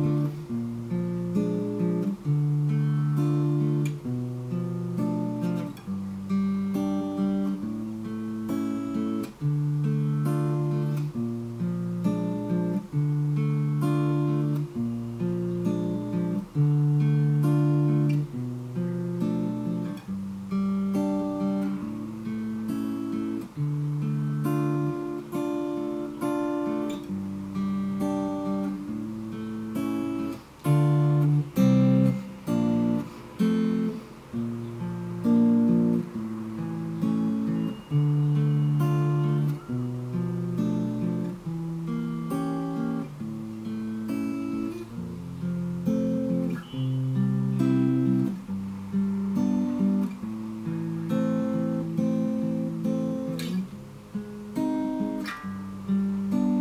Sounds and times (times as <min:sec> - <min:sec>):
Acoustic guitar: 0:00.0 - 0:56.6.